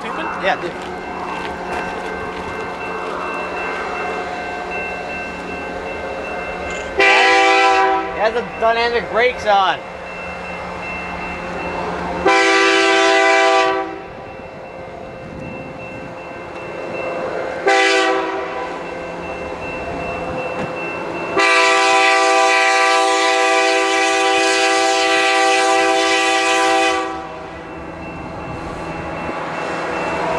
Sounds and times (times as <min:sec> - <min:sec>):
Railroad car, train wagon: 0:00.0 - 0:30.3
Train horn: 0:07.0 - 0:08.3, 0:12.2 - 0:14.1, 0:17.6 - 0:18.8, 0:21.4 - 0:27.5.